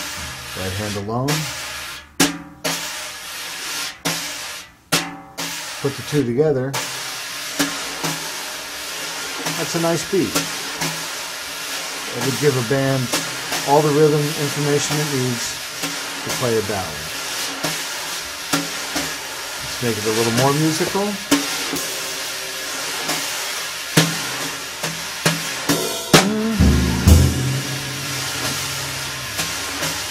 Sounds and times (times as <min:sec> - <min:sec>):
Drum: 0:00.0 - 0:03.0, 0:12.1 - 0:16.7, 0:21.3 - 0:30.1
Drum kit: 0:00.0 - 0:30.1
Speech: 0:00.6 - 0:01.6, 0:05.8 - 0:06.8, 0:09.5 - 0:10.4, 0:12.1 - 0:15.6, 0:16.2 - 0:17.1, 0:19.6 - 0:21.3.